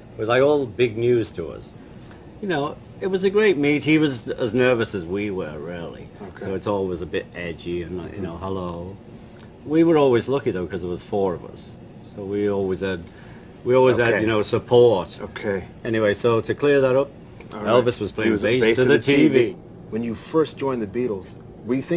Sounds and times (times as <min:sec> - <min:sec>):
Inside, small room: 0:00.0 - 0:21.9
Speech: 0:00.2 - 0:01.8, 0:02.4 - 0:09.0, 0:09.7 - 0:13.1, 0:13.7 - 0:21.9.